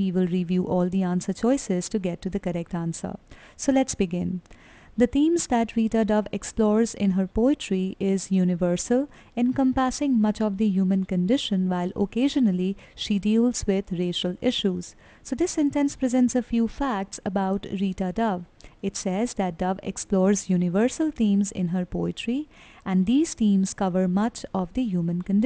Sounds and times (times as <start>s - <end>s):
Speech: 0.0s - 4.4s, 5.0s - 25.4s.